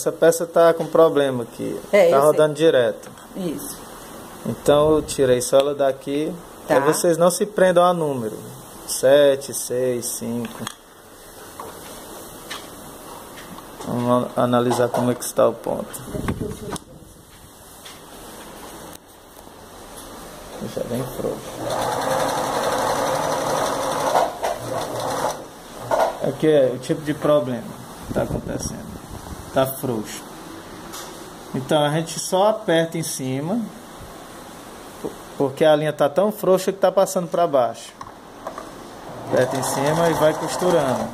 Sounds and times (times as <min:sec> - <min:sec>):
Speech: 0:00.0 - 0:03.8, 0:04.4 - 0:10.7, 0:13.8 - 0:17.0, 0:20.6 - 0:21.6, 0:26.2 - 0:29.0, 0:29.6 - 0:30.3, 0:31.5 - 0:33.8, 0:35.4 - 0:38.0, 0:39.3 - 0:41.1
Sewing machine: 0:21.5 - 0:25.5, 0:39.2 - 0:41.1.